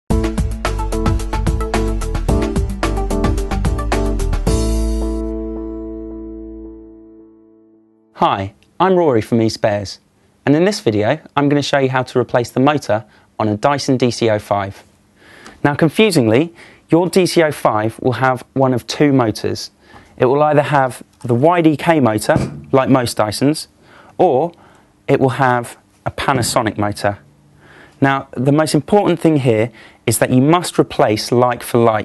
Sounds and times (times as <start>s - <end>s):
Music: 0.1s - 8.2s
Speech: 8.2s - 14.9s, 15.6s - 27.2s, 28.0s - 32.0s.